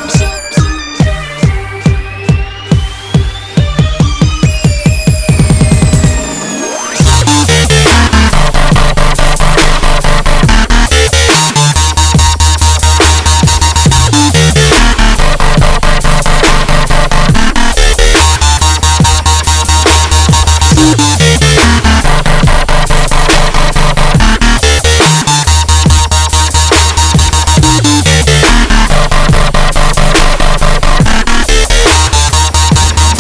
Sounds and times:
Dubstep: 0:00.0 - 0:33.2.

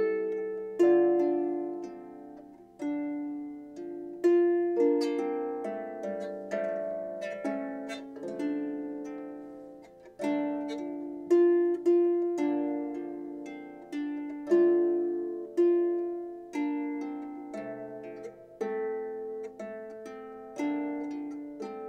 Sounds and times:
Harp: 0:00.0 - 0:21.8.

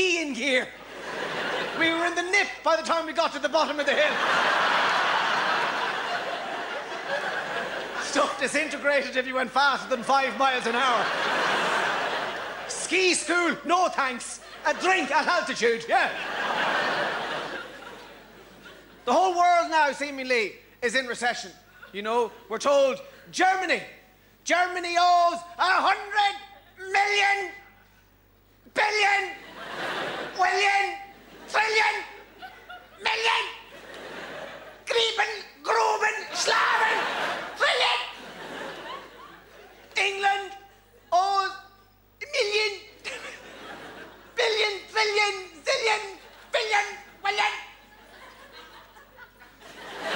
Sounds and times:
Speech: 0:00.0 - 0:00.8, 0:01.8 - 0:04.2, 0:08.0 - 0:11.1, 0:12.7 - 0:16.2, 0:19.0 - 0:27.7, 0:28.7 - 0:29.4, 0:30.3 - 0:32.2, 0:33.0 - 0:33.7, 0:34.8 - 0:37.0, 0:37.6 - 0:38.2, 0:39.9 - 0:43.4, 0:44.4 - 0:47.8
Snicker: 0:00.8 - 0:02.1, 0:03.8 - 0:08.4, 0:10.7 - 0:12.8, 0:16.0 - 0:19.1, 0:29.4 - 0:30.4, 0:32.2 - 0:34.9, 0:36.7 - 0:40.0, 0:43.0 - 0:44.4, 0:47.8 - 0:50.1.

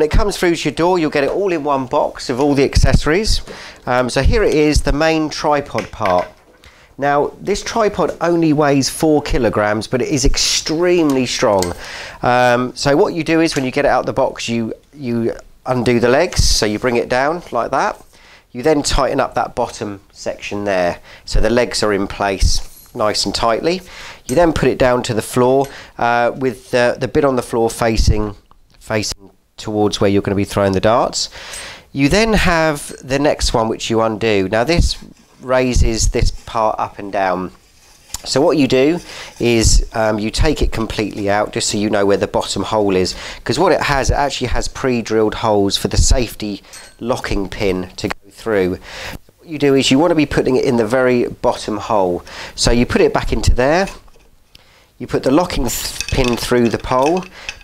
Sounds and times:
Speech: 0:00.0 - 0:06.4, 0:07.0 - 0:31.3, 0:31.9 - 0:37.6, 0:38.2 - 0:48.8, 0:49.4 - 0:54.0, 0:55.0 - 0:57.3.

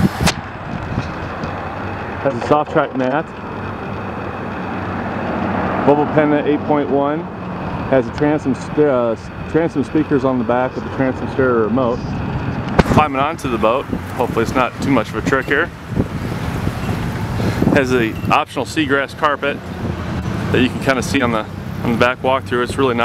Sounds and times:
Vehicle: 0:00.0 - 0:23.0
Speech: 0:02.2 - 0:03.3, 0:05.9 - 0:07.3, 0:07.9 - 0:12.1, 0:12.9 - 0:15.7, 0:17.7 - 0:19.6, 0:20.5 - 0:23.0.

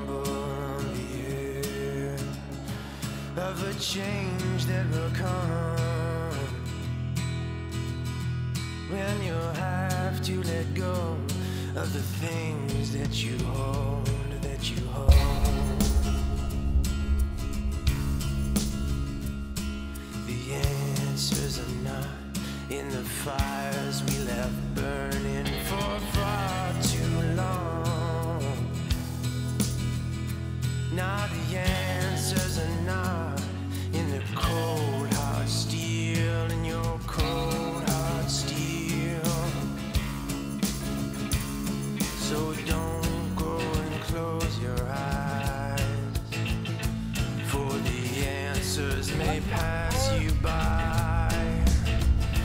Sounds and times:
Music: 0:00.0 - 0:52.4.

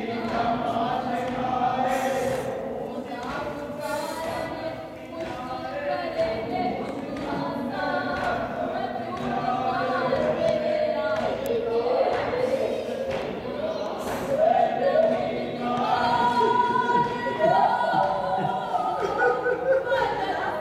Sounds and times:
Music: 0:00.0 - 0:20.6.

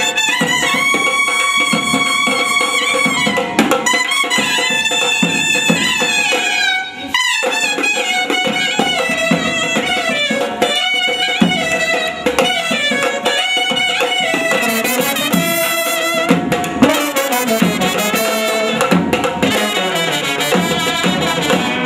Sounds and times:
Brass instrument: 0:00.0 - 0:21.8
Inside, large room or hall: 0:00.0 - 0:21.8.

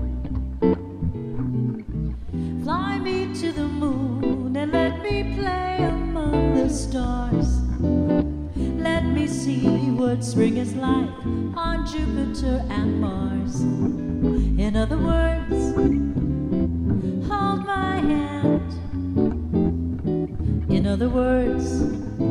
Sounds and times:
Jazz: 0:00.0 - 0:22.3.

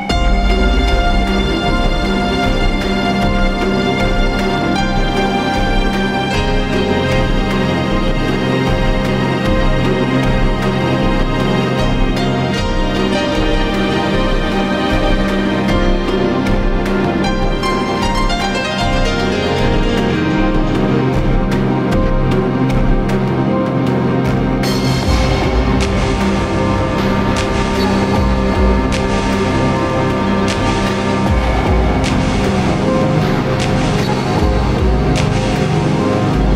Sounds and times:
Background music: 0:00.0 - 0:36.5
Theme music: 0:00.0 - 0:36.5.

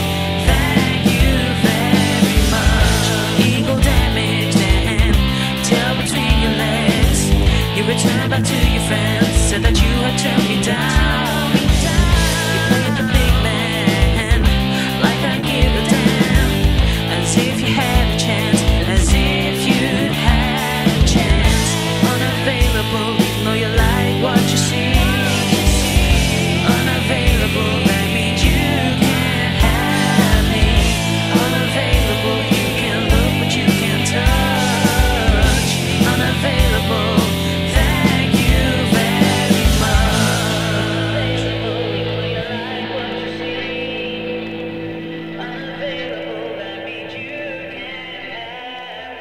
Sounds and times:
Effects unit: 0:00.0 - 0:49.2
Guitar: 0:00.0 - 0:49.2
Progressive rock: 0:00.0 - 0:49.2.

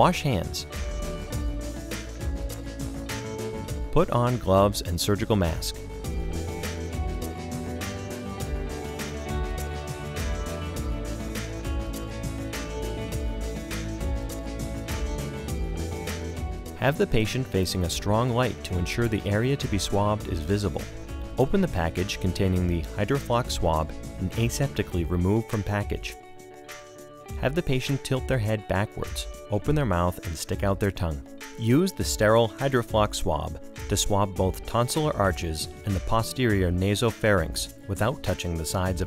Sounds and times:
Speech: 0:00.0 - 0:00.7, 0:03.9 - 0:05.8, 0:16.8 - 0:20.8, 0:21.4 - 0:26.2, 0:27.4 - 0:39.0
Music: 0:00.0 - 0:39.0.

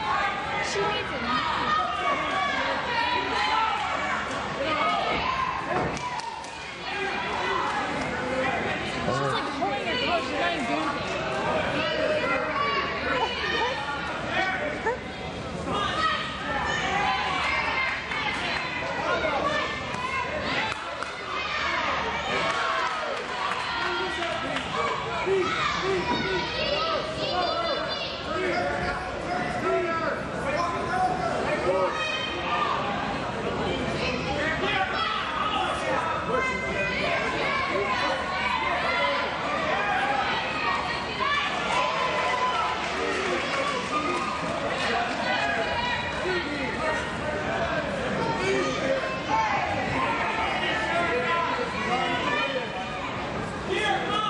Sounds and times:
Inside, public space: 0:00.0 - 0:54.3.

